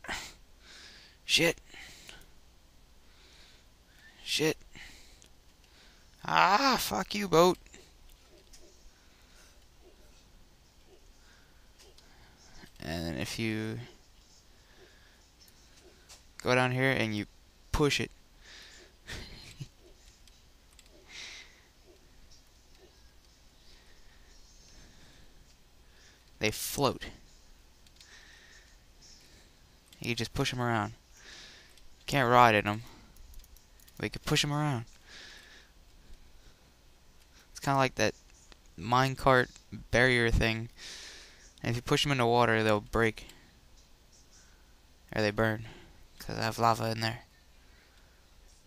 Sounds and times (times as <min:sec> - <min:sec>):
Speech: 0:06.2 - 0:07.6, 0:12.8 - 0:13.9, 0:16.4 - 0:18.1, 0:30.0 - 0:31.0, 0:32.1 - 0:32.9, 0:34.0 - 0:34.9, 0:37.6 - 0:38.1, 0:38.8 - 0:40.7, 0:41.6 - 0:43.3, 0:45.1 - 0:47.3.